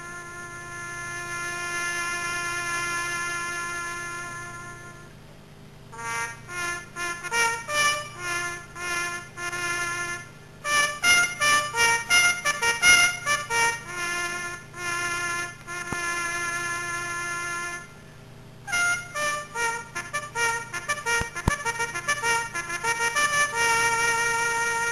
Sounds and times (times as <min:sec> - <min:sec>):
Music: 0:00.0 - 0:05.1, 0:06.0 - 0:17.9, 0:18.7 - 0:24.9.